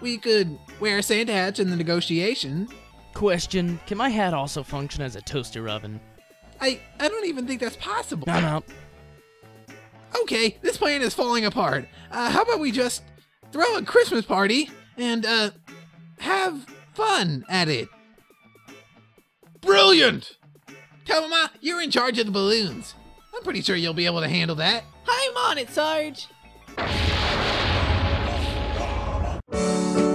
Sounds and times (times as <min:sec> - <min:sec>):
Speech: 0:00.0 - 0:06.0, 0:06.6 - 0:08.7, 0:10.1 - 0:13.0, 0:13.6 - 0:15.6, 0:16.2 - 0:17.9, 0:19.6 - 0:20.4, 0:21.1 - 0:26.3
Music: 0:00.0 - 0:30.1.